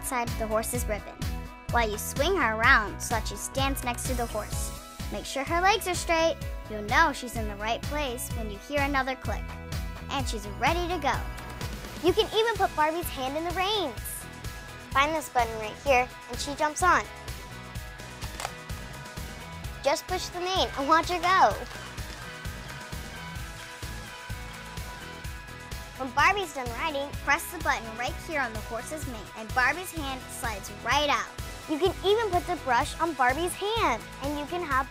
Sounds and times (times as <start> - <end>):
Speech: 0.0 - 9.4, 10.1 - 11.2, 12.0 - 14.2, 15.0 - 17.0, 19.8 - 21.7, 26.0 - 34.9
Music: 0.0 - 34.9.